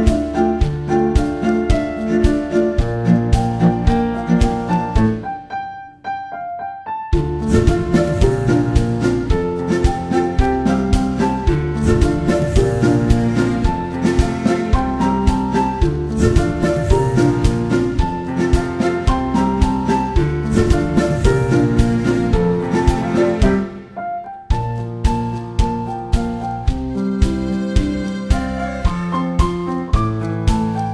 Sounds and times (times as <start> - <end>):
Piano: 0.0 - 30.9.